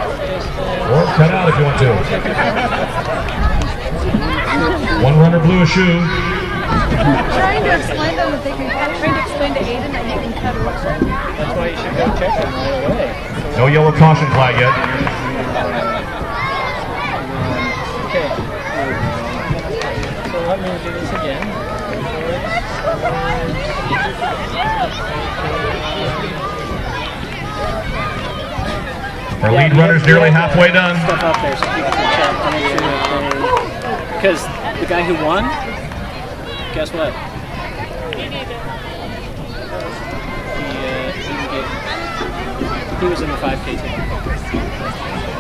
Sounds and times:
Inside, public space: 0:00.0 - 0:45.4.

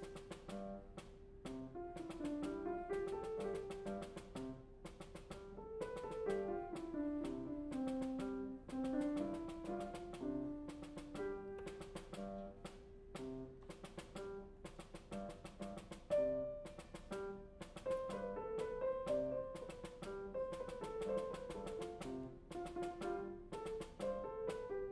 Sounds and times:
Percussion: 0:00.0 - 0:24.9.

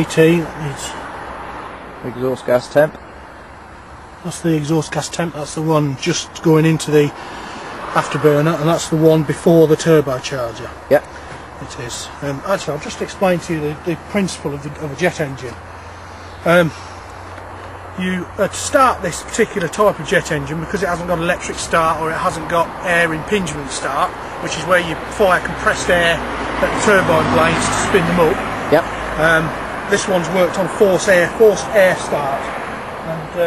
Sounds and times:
Speech: 0:00.0 - 0:01.0, 0:02.0 - 0:03.0, 0:04.2 - 0:07.2, 0:08.0 - 0:15.6, 0:16.4 - 0:16.8, 0:18.0 - 0:33.4.

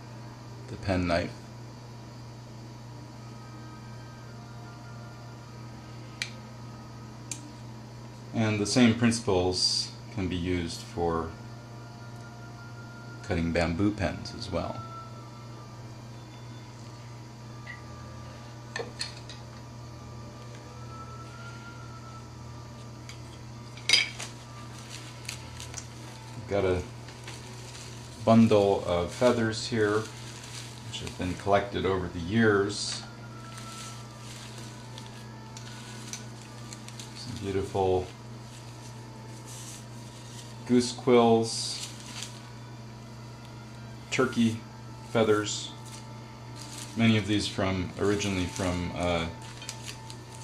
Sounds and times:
Speech: 0:00.7 - 0:01.4, 0:08.3 - 0:11.4, 0:13.2 - 0:14.8, 0:26.4 - 0:26.9, 0:28.2 - 0:30.1, 0:30.9 - 0:33.1, 0:37.2 - 0:38.1, 0:40.7 - 0:41.8, 0:45.2 - 0:45.8, 0:47.0 - 0:49.4.

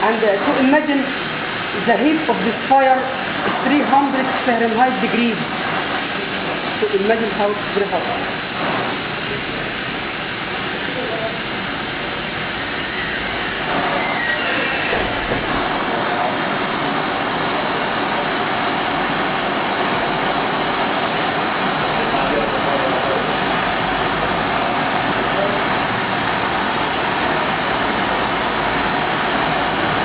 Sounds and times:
Speech: 0:00.0 - 0:01.2, 0:01.8 - 0:05.5, 0:06.8 - 0:08.2, 0:10.8 - 0:11.5, 0:22.0 - 0:23.4.

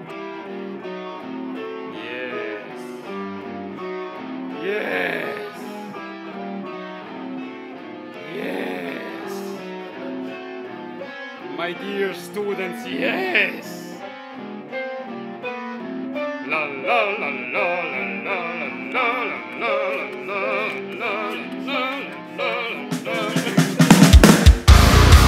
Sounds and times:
Acoustic guitar: 0:00.0 - 0:25.2
Speech: 0:02.0 - 0:02.8, 0:04.6 - 0:05.7, 0:08.3 - 0:09.6, 0:11.6 - 0:14.0
Strum: 0:15.5 - 0:25.2.

